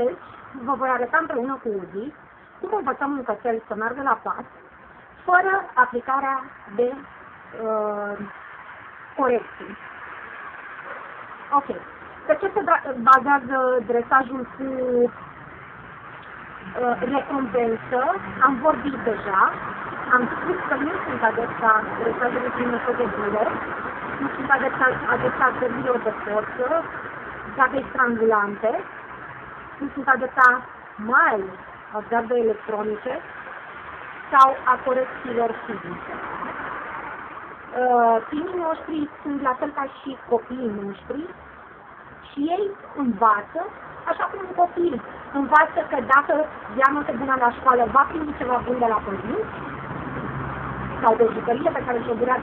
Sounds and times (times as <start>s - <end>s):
Speech: 0.0s - 4.5s, 5.3s - 8.3s, 9.2s - 9.8s, 11.6s - 15.2s, 16.7s - 23.6s, 24.2s - 26.9s, 27.5s - 28.9s, 29.8s - 33.2s, 34.4s - 36.0s, 37.7s - 41.4s, 42.3s - 49.5s, 51.0s - 52.4s.